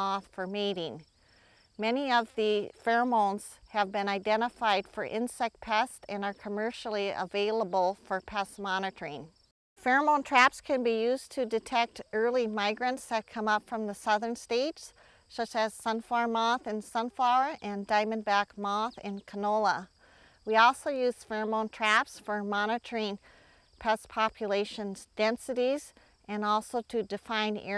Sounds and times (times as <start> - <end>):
Speech: 0.0 - 1.0, 1.8 - 19.9, 20.5 - 23.2, 23.8 - 27.7.